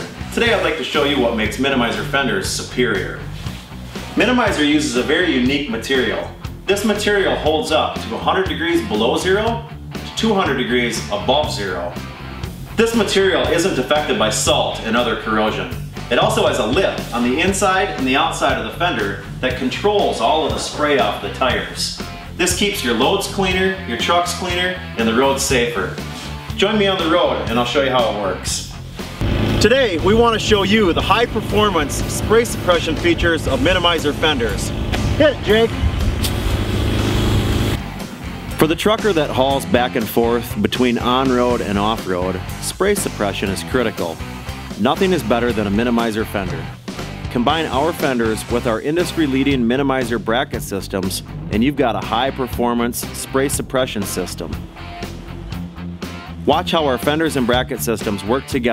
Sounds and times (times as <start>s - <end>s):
Speech: 0.0s - 3.3s, 4.2s - 12.0s, 12.8s - 28.8s, 29.6s - 35.8s, 38.6s - 44.2s, 44.8s - 54.6s, 56.4s - 58.7s
Music: 0.0s - 58.7s.